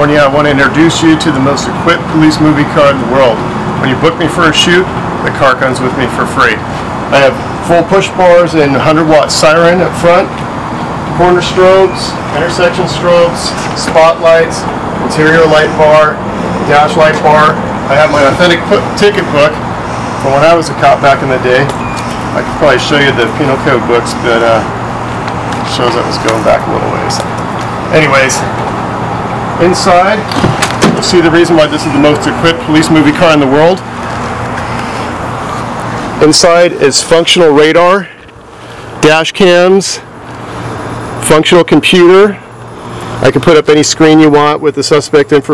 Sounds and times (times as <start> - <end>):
Speech: 0.0 - 10.4, 11.2 - 19.6, 20.2 - 21.7, 22.4 - 24.7, 25.7 - 27.3, 27.9 - 28.6, 29.6 - 30.3, 31.0 - 33.9, 36.2 - 38.2, 39.0 - 40.1, 41.2 - 42.5, 43.2 - 45.5.